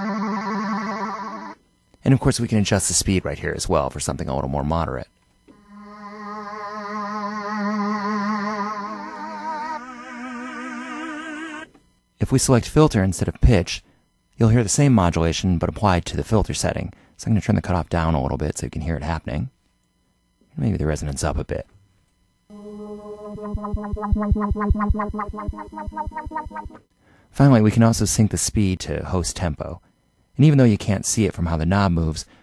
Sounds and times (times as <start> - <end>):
Speech: 2.0 - 5.1, 12.2 - 13.8, 14.4 - 19.6, 20.5 - 21.7, 27.4 - 29.8, 30.4 - 32.3
Sampler: 5.5 - 11.8, 22.5 - 26.9.